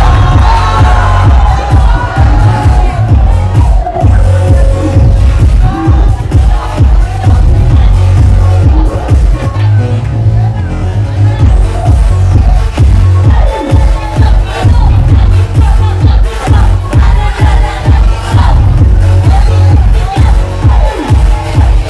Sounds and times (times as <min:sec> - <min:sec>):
Music: 0:00.0 - 0:21.8
Speech: 0:05.6 - 0:12.4.